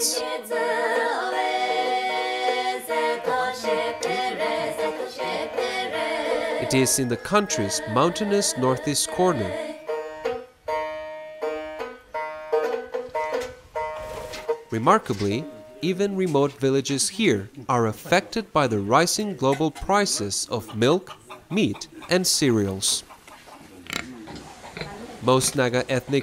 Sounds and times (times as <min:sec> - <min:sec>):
Music: 0:00.0 - 0:15.8
Speech: 0:06.6 - 0:09.6, 0:14.8 - 0:23.0, 0:24.8 - 0:26.2.